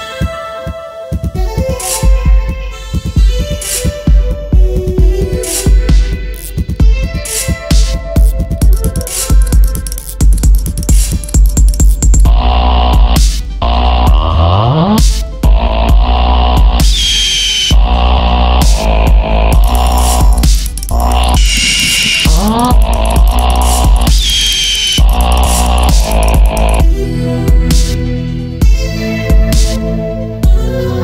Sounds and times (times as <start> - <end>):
Dubstep: 4.8 - 30.0.